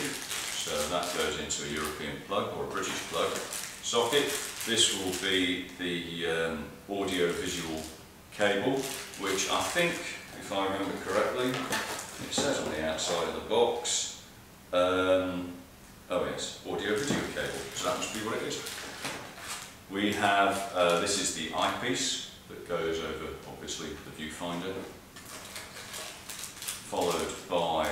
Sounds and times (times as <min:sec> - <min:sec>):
Speech: 0:00.0 - 0:18.8, 0:19.9 - 0:25.0, 0:26.9 - 0:27.9.